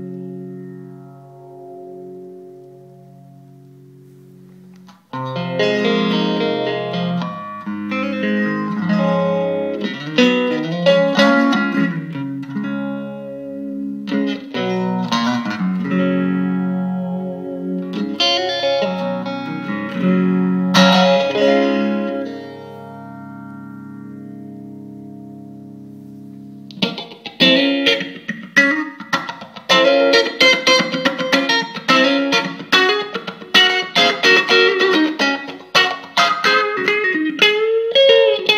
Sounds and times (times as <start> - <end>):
Distortion: 0.0 - 38.5
Effects unit: 0.0 - 38.5
Guitar: 0.0 - 38.5.